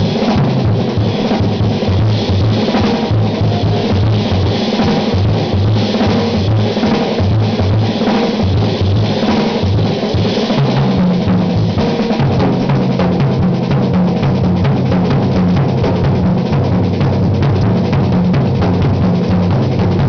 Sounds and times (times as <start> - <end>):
Bass drum: 0.0 - 20.0
Drum kit: 0.0 - 20.0
Drum roll: 0.0 - 20.0
Rimshot: 0.0 - 20.0.